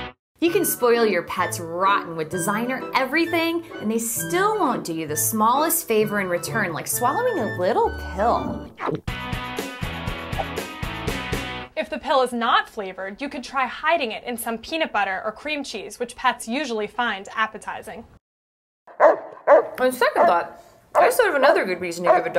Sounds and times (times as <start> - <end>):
Music: 0.0 - 11.8
Speech: 0.4 - 8.6, 11.8 - 18.1, 19.8 - 22.3.